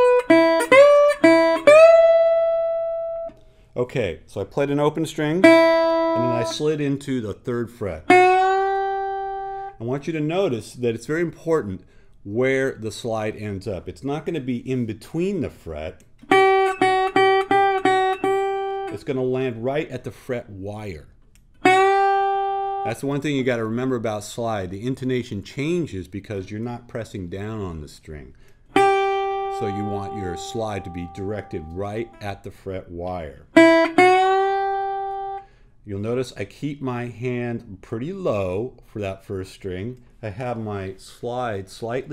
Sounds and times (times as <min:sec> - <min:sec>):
Speech: 0:03.8 - 0:05.5, 0:06.2 - 0:08.1, 0:09.8 - 0:16.0, 0:18.9 - 0:21.2, 0:22.9 - 0:28.4, 0:29.5 - 0:33.5, 0:35.9 - 0:42.1.